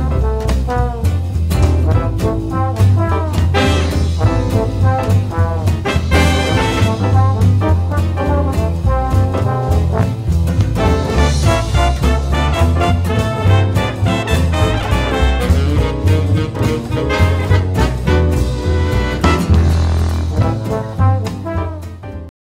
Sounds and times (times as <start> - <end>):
Music: 0.0 - 22.3.